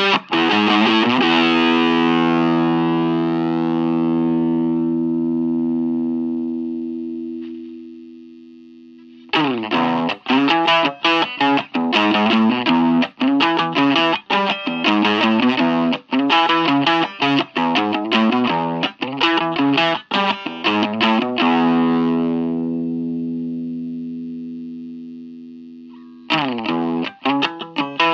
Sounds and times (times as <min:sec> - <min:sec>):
Guitar: 0:00.0 - 0:28.1.